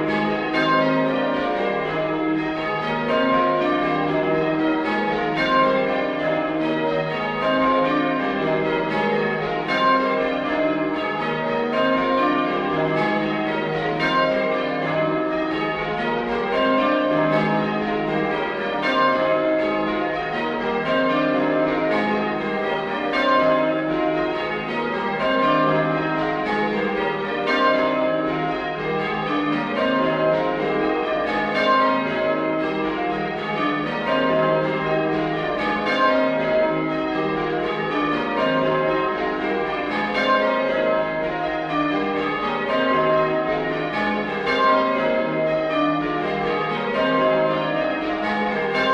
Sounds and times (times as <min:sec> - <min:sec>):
Change ringing (campanology): 0:00.0 - 0:48.9.